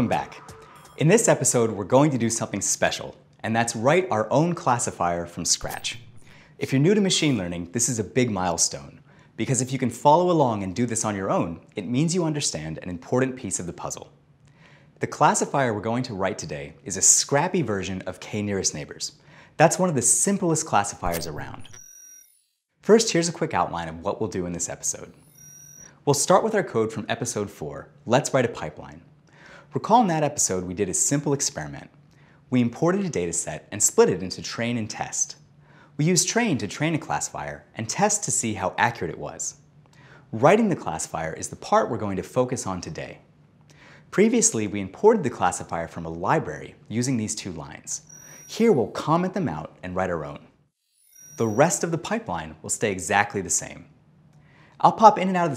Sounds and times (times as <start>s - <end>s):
Speech: 0.0s - 0.4s, 1.0s - 6.0s, 6.6s - 14.2s, 15.0s - 21.7s, 22.9s - 25.1s, 26.1s - 29.1s, 29.7s - 31.9s, 32.5s - 35.4s, 36.0s - 39.6s, 40.3s - 43.2s, 44.1s - 50.5s, 51.4s - 53.9s, 54.8s - 55.5s.